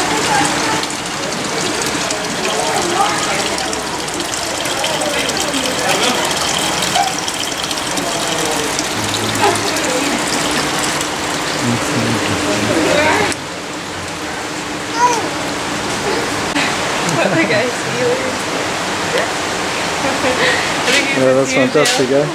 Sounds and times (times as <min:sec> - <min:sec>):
Water: 0:00.0 - 0:22.3
Speech: 0:08.2 - 0:10.0, 0:11.6 - 0:13.4.